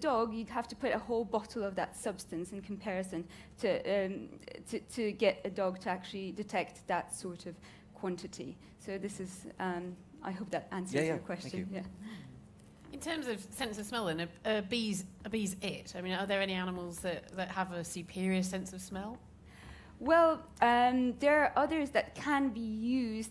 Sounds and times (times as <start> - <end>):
Female speech, woman speaking: 0.0 - 12.2, 12.9 - 19.2, 20.0 - 23.3.